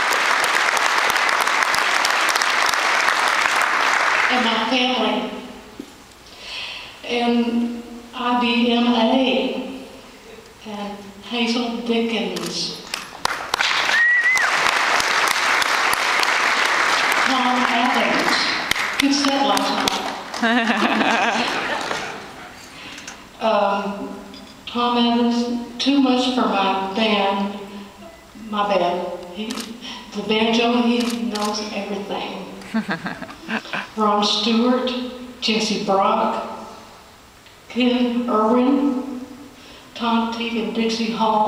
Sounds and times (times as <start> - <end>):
Female speech, woman speaking: 4.3 - 5.5, 7.0 - 9.8, 10.6 - 12.8, 17.2 - 20.2, 23.4 - 27.6, 28.4 - 32.6, 34.0 - 36.6, 37.7 - 39.1, 40.0 - 41.4
Narration, monologue: 21.4 - 32.8.